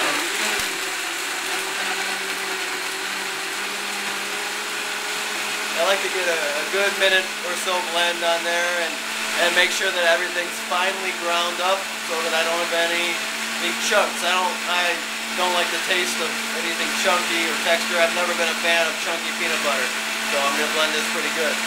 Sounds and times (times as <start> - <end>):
Blender: 0.0 - 21.6.